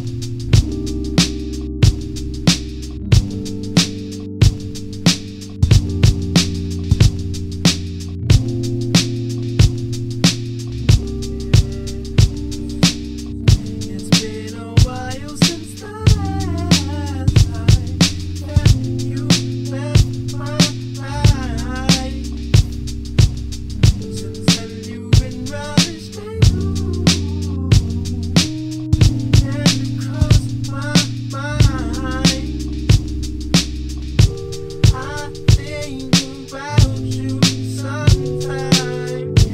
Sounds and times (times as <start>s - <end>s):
Music: 0.0s - 39.5s.